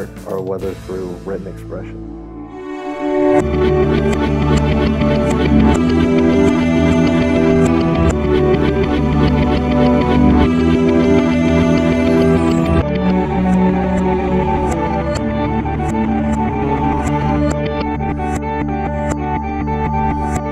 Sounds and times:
Ambient music: 0.0 - 20.5.

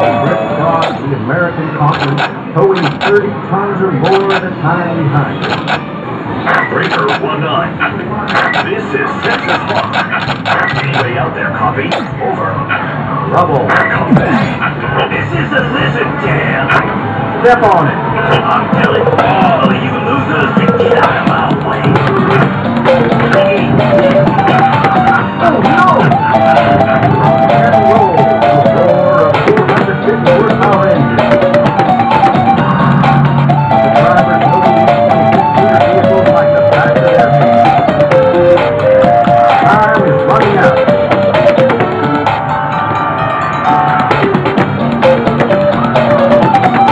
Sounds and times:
Music: 0.0 - 1.2, 13.5 - 46.9
Speech: 0.2 - 5.4, 6.7 - 9.9, 10.7 - 12.6, 17.4 - 22.4, 27.5 - 31.3, 34.0 - 34.8, 35.6 - 37.4, 39.5 - 40.8.

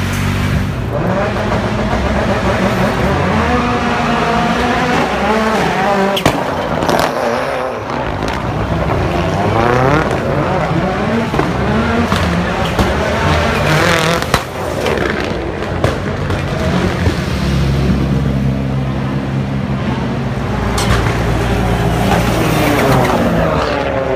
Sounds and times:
Outside, urban or manmade: 0.0 - 24.1.

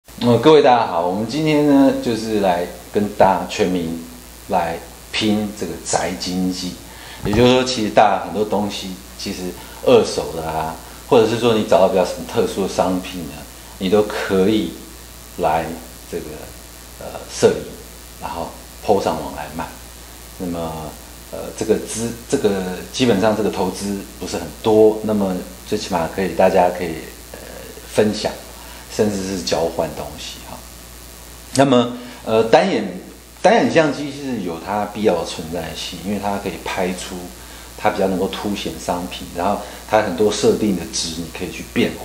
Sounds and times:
Speech: 0.2 - 19.8, 20.4 - 30.7, 31.5 - 42.0.

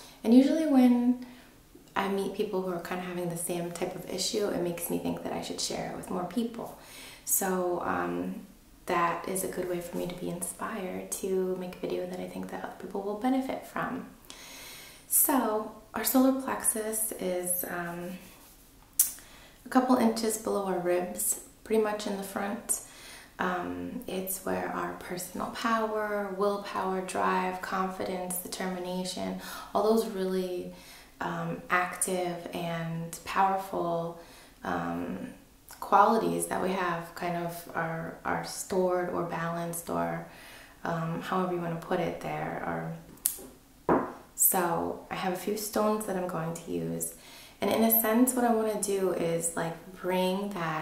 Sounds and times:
Speech: 0.2 - 1.2, 2.0 - 14.2, 15.1 - 18.3, 19.7 - 22.8, 23.4 - 43.4, 44.4 - 50.8.

